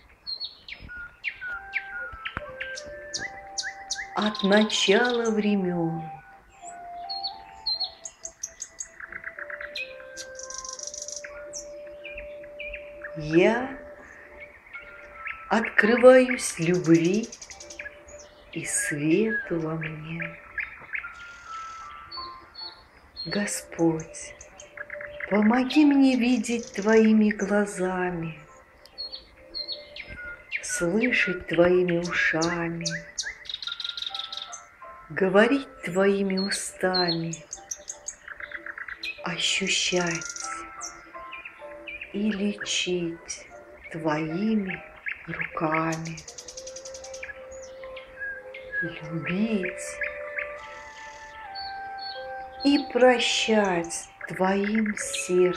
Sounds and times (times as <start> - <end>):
Music: 0.8 - 55.5
Speech: 4.2 - 6.2, 13.2 - 13.9, 15.5 - 17.3, 18.6 - 20.4, 23.3 - 24.4, 25.3 - 28.5, 30.6 - 33.0, 35.1 - 37.4, 39.2 - 40.6, 42.2 - 46.2, 48.8 - 50.0, 52.6 - 55.5.